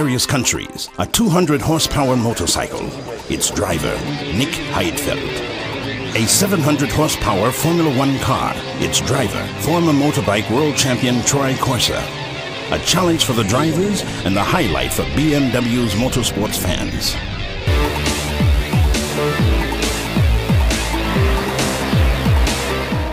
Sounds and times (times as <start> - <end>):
Speech: 0.0 - 5.5, 6.1 - 12.1, 12.7 - 17.2
Music: 0.0 - 23.1.